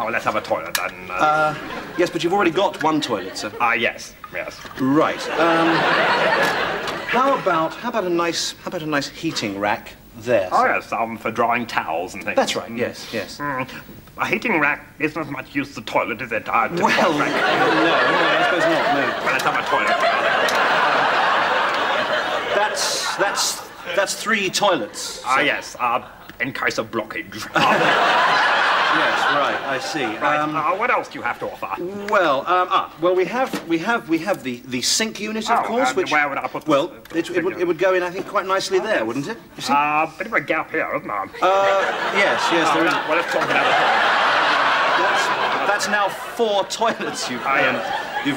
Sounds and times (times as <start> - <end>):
Speech: 0.0 - 5.8, 7.1 - 20.0, 22.5 - 27.7, 28.9 - 43.8, 45.0 - 48.3.